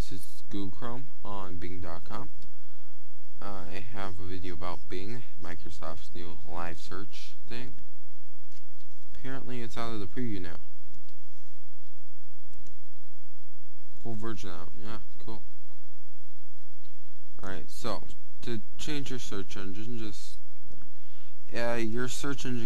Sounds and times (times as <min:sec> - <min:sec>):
Speech: 0:00.0 - 0:02.3, 0:03.4 - 0:07.8, 0:09.2 - 0:10.6, 0:14.0 - 0:15.4, 0:17.4 - 0:20.4, 0:21.5 - 0:22.6.